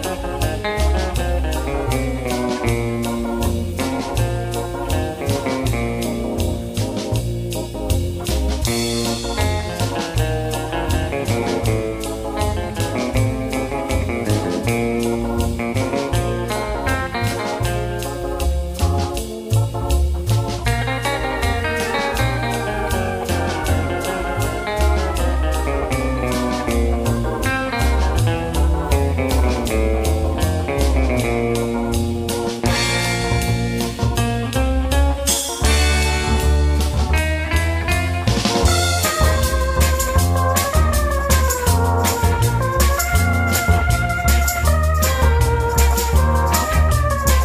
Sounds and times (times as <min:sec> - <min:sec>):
Psychedelic rock: 0:00.0 - 0:47.4.